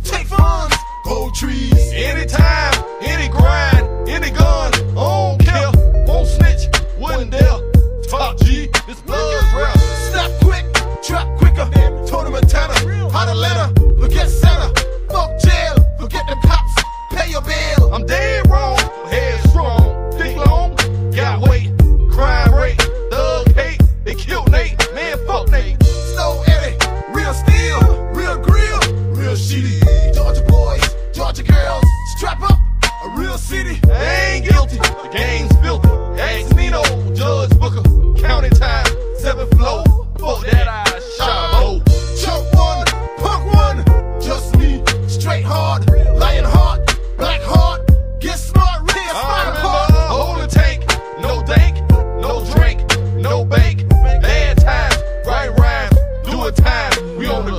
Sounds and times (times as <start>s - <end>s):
Music: 0.0s - 57.5s.